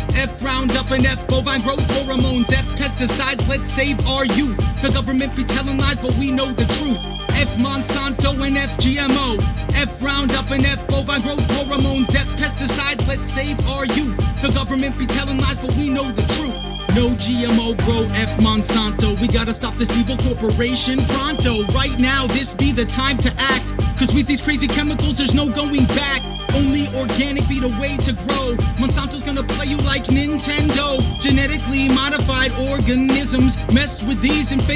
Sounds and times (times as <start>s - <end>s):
Music: 0.0s - 34.7s.